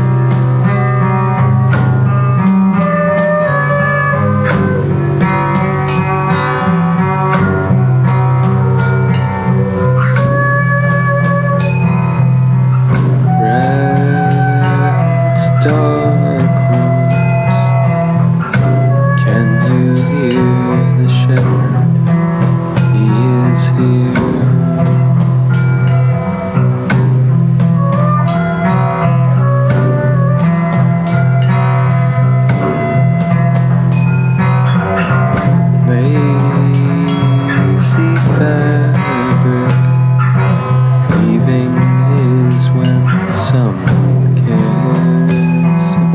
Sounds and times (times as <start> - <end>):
Steel guitar, slide guitar: 0.0 - 46.1.